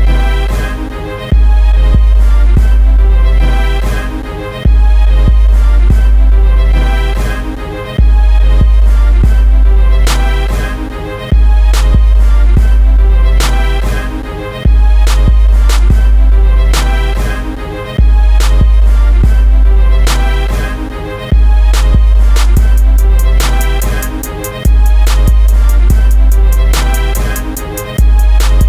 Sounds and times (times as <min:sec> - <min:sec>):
Music: 0:00.0 - 0:28.6.